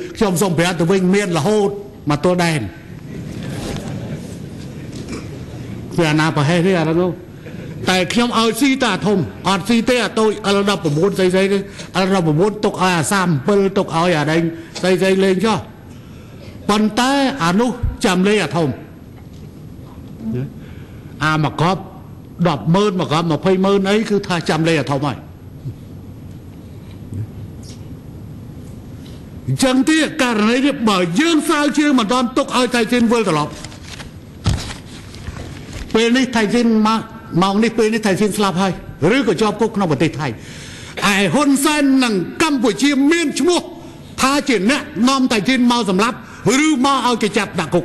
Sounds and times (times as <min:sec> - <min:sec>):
Narration, monologue: 0:00.0 - 0:47.8
Male speech, man speaking: 0:00.2 - 0:02.8, 0:06.0 - 0:07.2, 0:07.8 - 0:15.7, 0:16.7 - 0:18.8, 0:21.2 - 0:25.2, 0:29.5 - 0:33.6, 0:35.9 - 0:40.4, 0:41.0 - 0:47.8.